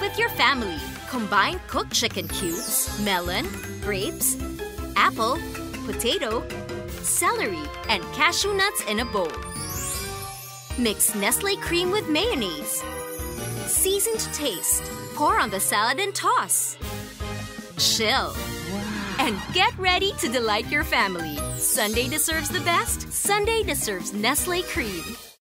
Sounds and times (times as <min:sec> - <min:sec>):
Speech: 0:00.0 - 0:04.4, 0:05.0 - 0:06.4, 0:07.1 - 0:09.4, 0:10.8 - 0:12.8, 0:13.8 - 0:16.8, 0:17.8 - 0:25.2
Music: 0:00.0 - 0:25.4.